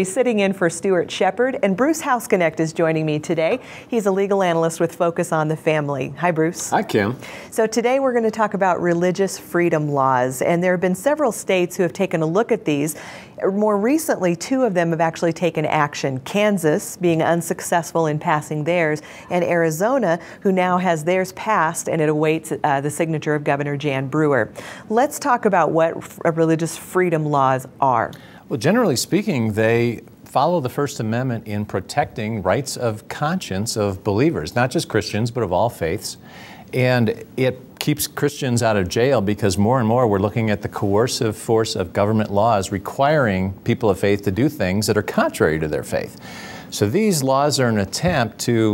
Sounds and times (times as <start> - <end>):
Speech: 4.1 - 12.8, 36.8 - 48.7.